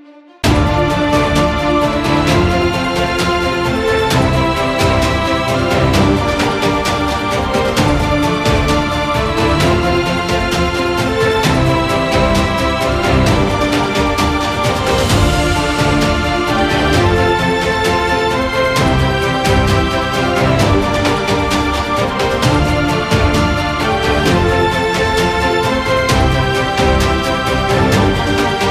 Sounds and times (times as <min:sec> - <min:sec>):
Theme music: 0:00.0 - 0:28.7.